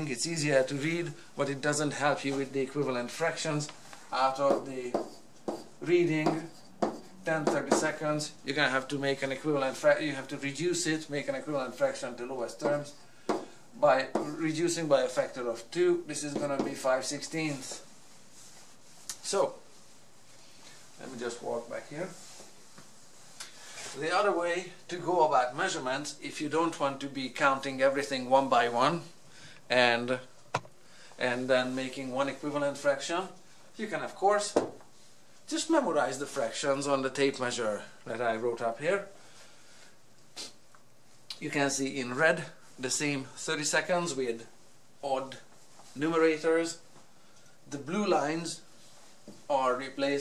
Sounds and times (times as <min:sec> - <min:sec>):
Speech: 0:00.0 - 0:05.2, 0:05.8 - 0:06.6, 0:07.2 - 0:13.0, 0:13.8 - 0:17.9, 0:19.1 - 0:19.7, 0:21.0 - 0:22.2, 0:23.9 - 0:30.3, 0:31.2 - 0:34.8, 0:35.5 - 0:39.2, 0:41.3 - 0:46.8, 0:47.7 - 0:48.7, 0:49.5 - 0:50.2.